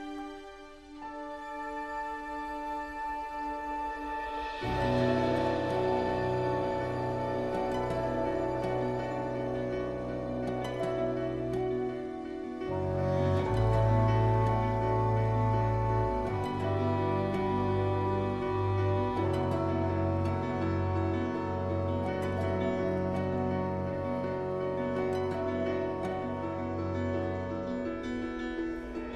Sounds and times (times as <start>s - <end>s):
Music: 0.0s - 29.1s.